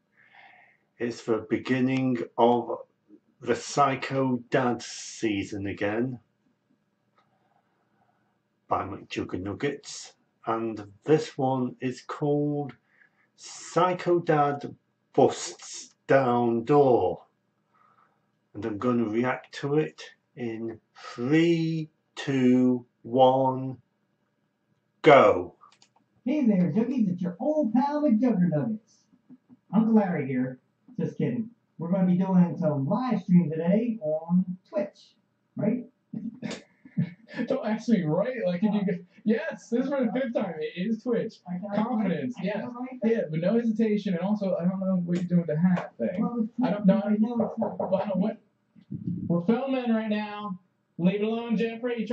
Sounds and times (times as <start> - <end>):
Speech: 1.0 - 2.8, 3.4 - 6.2, 8.7 - 12.7, 13.4 - 17.2, 18.6 - 23.8, 25.0 - 25.6, 26.3 - 28.8, 29.7 - 52.1.